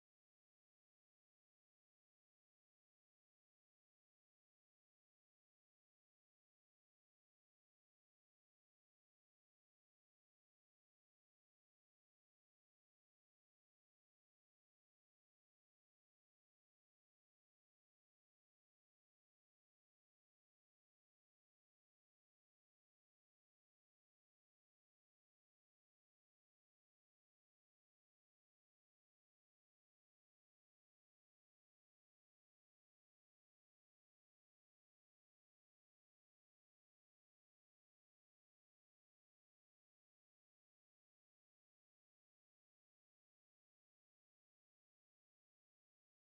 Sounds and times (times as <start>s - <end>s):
Music: 0.0s - 46.2s.